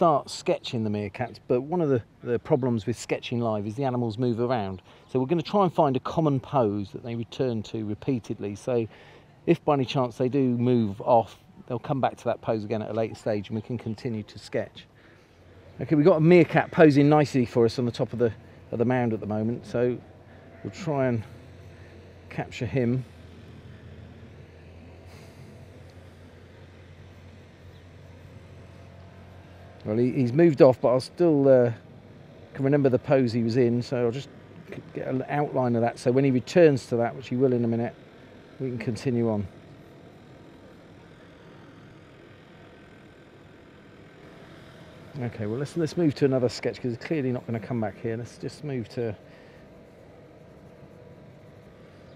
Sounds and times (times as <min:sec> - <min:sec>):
Speech: 0:00.0 - 0:08.9, 0:09.5 - 0:14.9, 0:15.8 - 0:20.0, 0:20.6 - 0:21.3, 0:22.3 - 0:23.1, 0:29.8 - 0:31.8, 0:32.5 - 0:38.0, 0:38.6 - 0:39.6, 0:45.2 - 0:49.2.